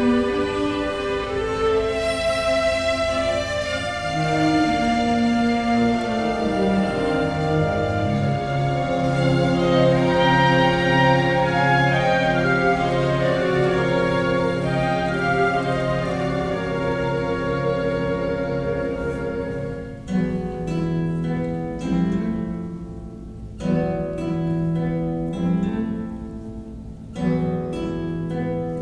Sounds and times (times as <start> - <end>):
Acoustic guitar: 0.0 - 28.8.